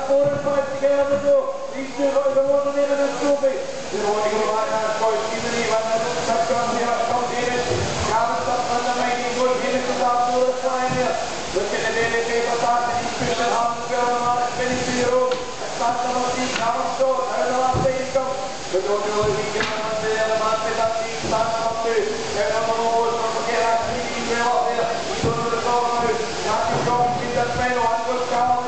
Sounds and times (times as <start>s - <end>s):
Speech: 0.0s - 28.6s.